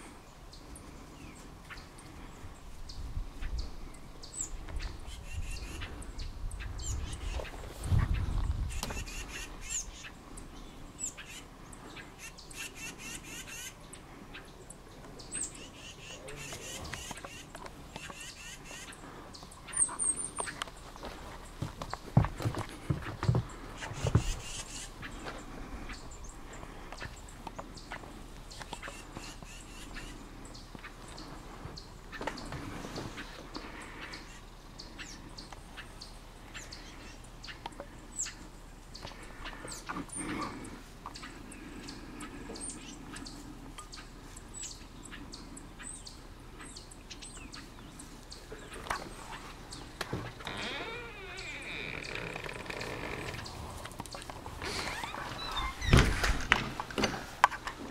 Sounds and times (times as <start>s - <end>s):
Bird vocalization, bird call, bird song: 0.0s - 21.2s, 21.9s - 54.2s, 54.8s - 56.3s
Outside, rural or natural: 0.0s - 57.9s.